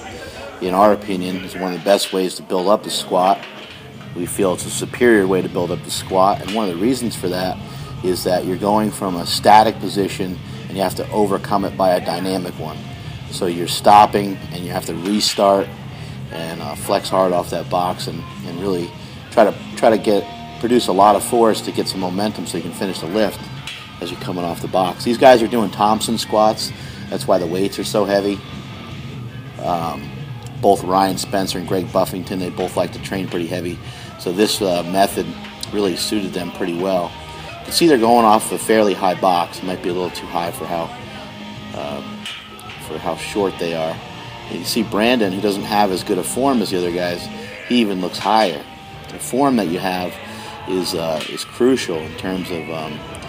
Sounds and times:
Speech: 0.0 - 3.4, 4.2 - 15.7, 16.3 - 23.4, 24.0 - 28.4, 29.6 - 37.1, 37.7 - 40.9, 41.8 - 42.2, 42.8 - 53.0
Music: 0.0 - 53.2.

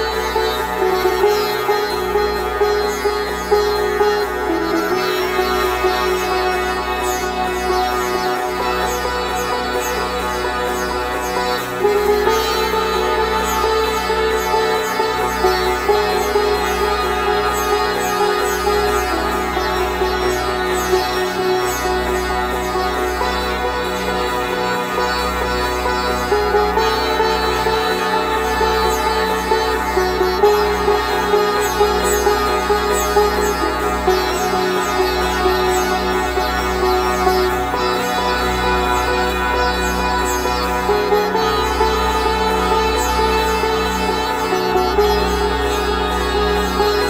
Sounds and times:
Traditional music: 0.0 - 47.0.

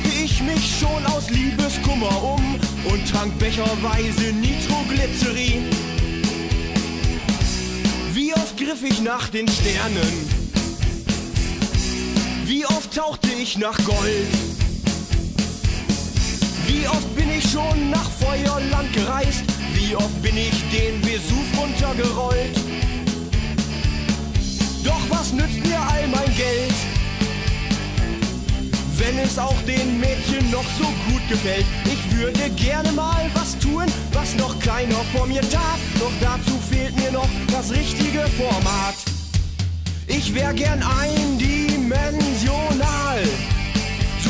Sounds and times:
Music: 0.0 - 44.3.

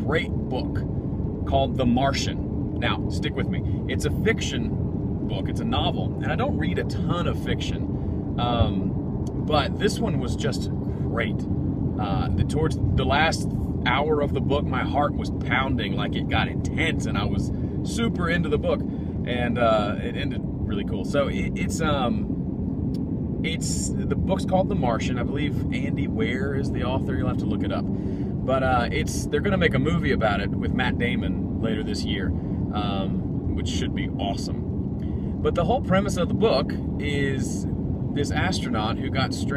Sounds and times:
Speech: 0.0 - 0.8, 1.5 - 4.7, 5.3 - 7.8, 8.4 - 11.4, 12.0 - 22.3, 23.5 - 27.8, 28.4 - 34.6, 35.4 - 37.6, 38.2 - 39.5.

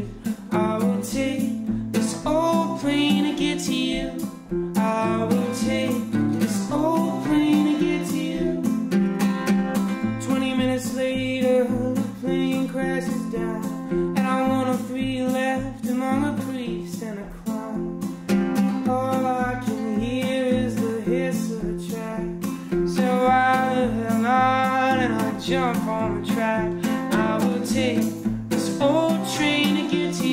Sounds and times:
Music: 0.0 - 30.3.

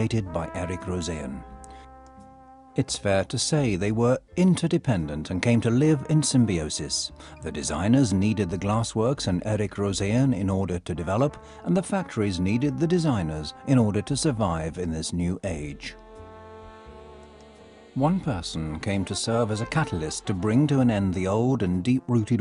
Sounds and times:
Speech: 0.0 - 1.5, 2.8 - 16.0, 18.0 - 22.4
Music: 0.0 - 22.4.

